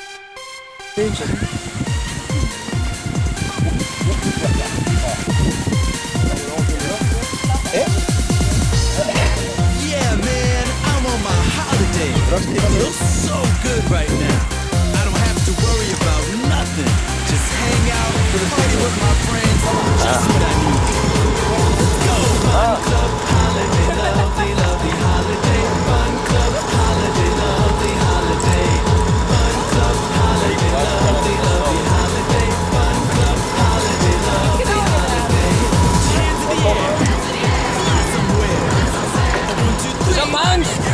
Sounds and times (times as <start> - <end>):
Music: 0.0 - 40.9
Speech: 1.0 - 1.8, 3.4 - 5.4, 6.0 - 8.0, 8.9 - 40.9.